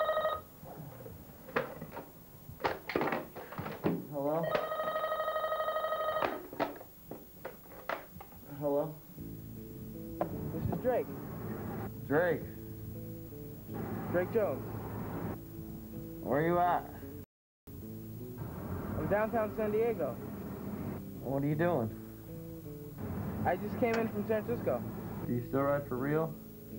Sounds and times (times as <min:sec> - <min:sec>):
Speech: 0:04.1 - 0:04.5, 0:08.5 - 0:09.0, 0:10.5 - 0:11.1, 0:12.1 - 0:12.6, 0:14.1 - 0:14.6, 0:16.2 - 0:17.0, 0:19.0 - 0:20.2, 0:21.2 - 0:22.0, 0:23.4 - 0:26.4
Music: 0:08.6 - 0:26.7.